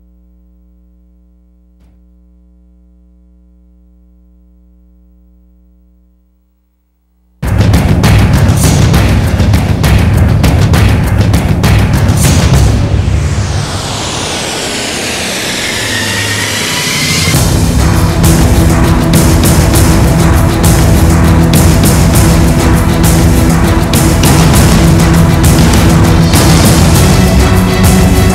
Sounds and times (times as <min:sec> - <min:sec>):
Music: 0:07.4 - 0:28.3.